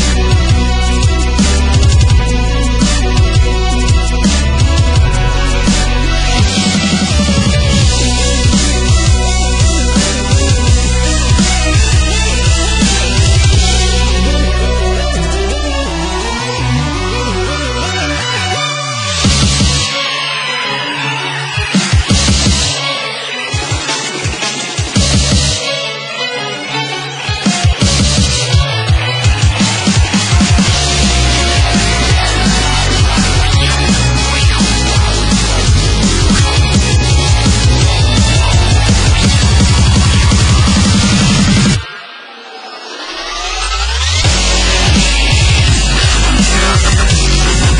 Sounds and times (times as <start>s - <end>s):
Music: 0.0s - 47.7s.